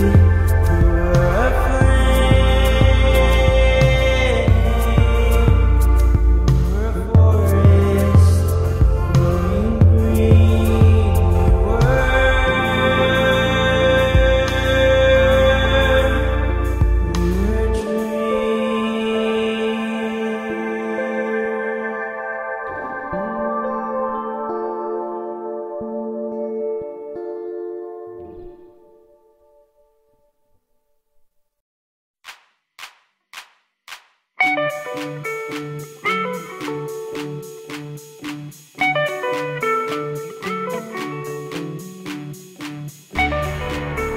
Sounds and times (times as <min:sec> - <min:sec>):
Independent music: 0:00.0 - 0:29.8, 0:34.4 - 0:44.1.